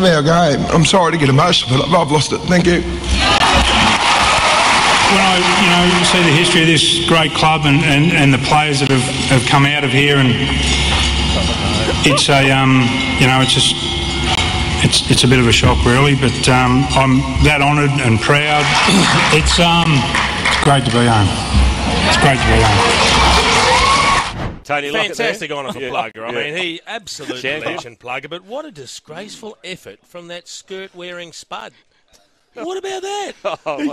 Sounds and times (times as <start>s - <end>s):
Speech: 0.0s - 2.8s, 5.1s - 10.4s, 11.8s - 13.8s, 14.8s - 21.4s, 24.7s - 31.8s, 32.6s - 33.9s.